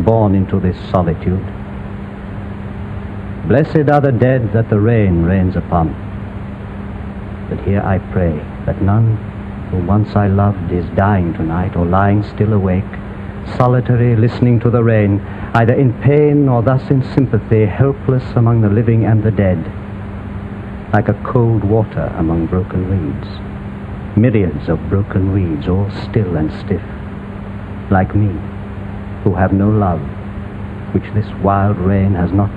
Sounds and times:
Speech: 0:00.0 - 0:01.5, 0:03.5 - 0:06.0, 0:07.5 - 0:19.8, 0:21.0 - 0:23.5, 0:24.2 - 0:26.9, 0:27.9 - 0:28.5, 0:29.3 - 0:30.2, 0:31.0 - 0:32.5.

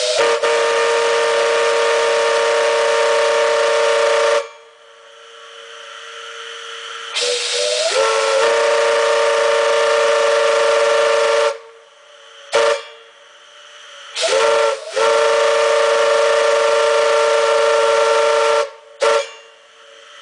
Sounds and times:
Steam whistle: 0:00.0 - 0:04.8, 0:06.3 - 0:13.2, 0:14.1 - 0:19.6.

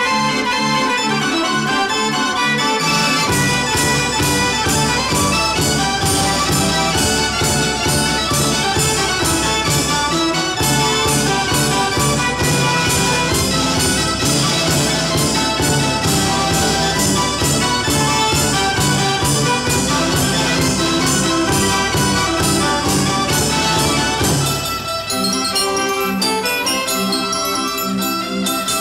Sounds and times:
Jingle (music): 0:00.0 - 0:28.8.

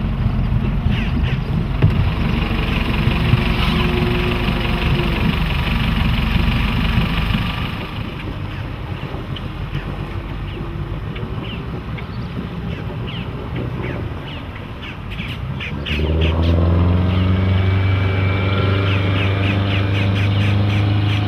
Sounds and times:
Motorboat, speedboat: 0:00.0 - 0:21.2.

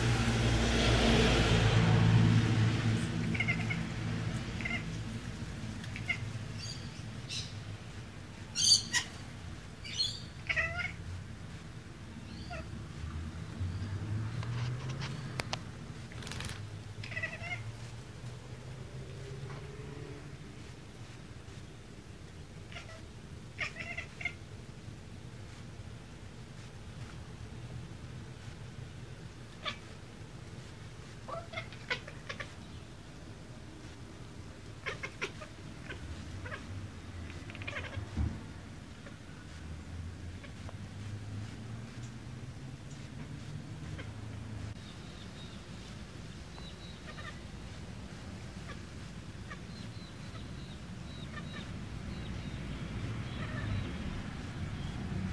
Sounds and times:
Caterwaul: 0:03.3 - 0:03.8, 0:04.6 - 0:04.9, 0:10.4 - 0:11.0, 0:17.1 - 0:17.6, 0:23.6 - 0:24.4, 0:37.3 - 0:38.0
Bird vocalization, bird call, bird song: 0:06.0 - 0:07.6, 0:08.6 - 0:09.2, 0:09.8 - 0:10.4, 0:44.8 - 0:47.4, 0:49.5 - 0:55.1.

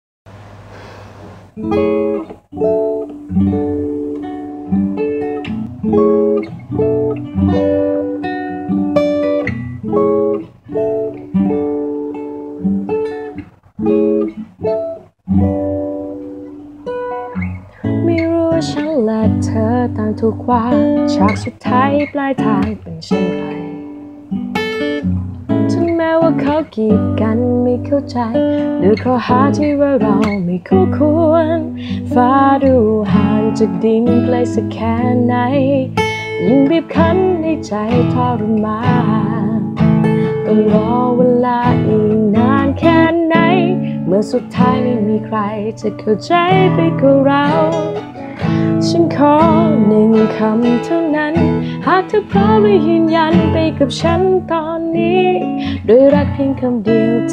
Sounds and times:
Acoustic guitar: 0:00.3 - 0:57.3.

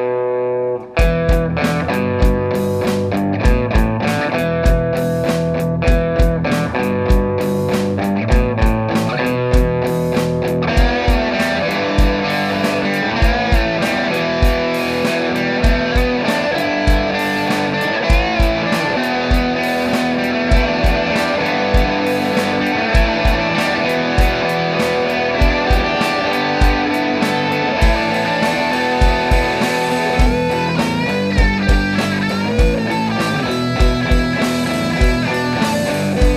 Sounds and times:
Heavy metal: 0:00.0 - 0:36.3
Progressive rock: 0:00.0 - 0:36.3
Punk rock: 0:00.8 - 0:36.3.

